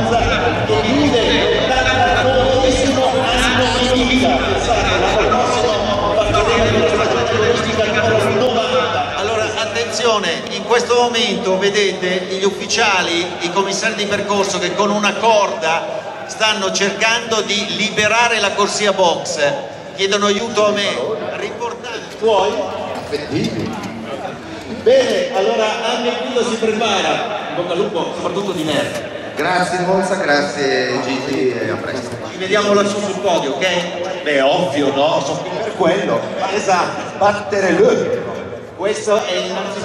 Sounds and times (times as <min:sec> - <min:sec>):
Speech: 0:00.0 - 0:39.8.